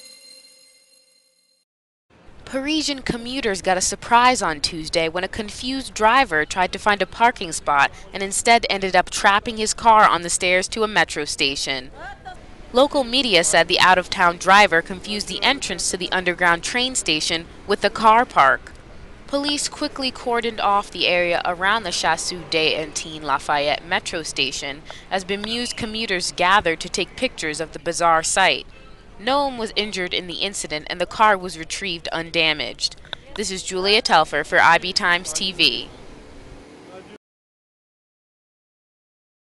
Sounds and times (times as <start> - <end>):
Vehicle: 2.2 - 37.2
Speech: 2.5 - 18.7, 19.3 - 28.6, 29.2 - 35.9.